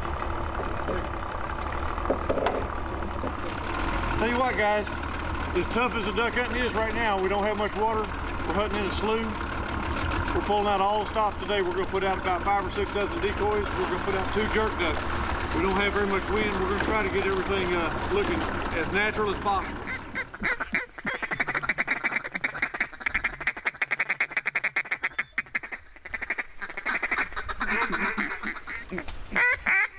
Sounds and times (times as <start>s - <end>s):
Speech: 4.2s - 4.9s, 5.6s - 9.4s, 10.4s - 15.0s, 15.6s - 19.7s.